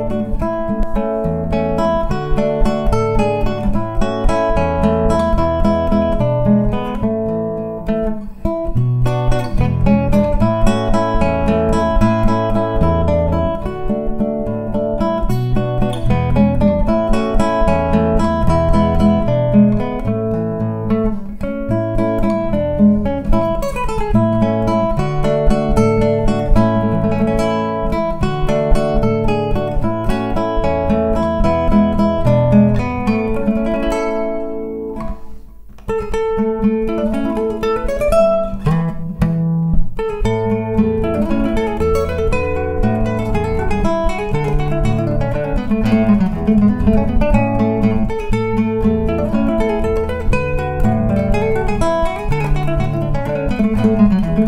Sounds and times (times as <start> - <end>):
Acoustic guitar: 0.0 - 54.4
Electric guitar: 0.0 - 54.4
Strum: 0.0 - 54.4.